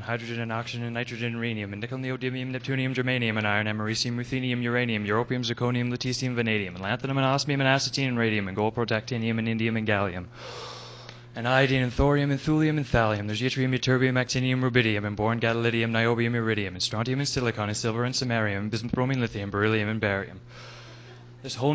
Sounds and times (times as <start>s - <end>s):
Speech: 0.0s - 10.3s, 11.4s - 20.4s, 21.4s - 21.7s.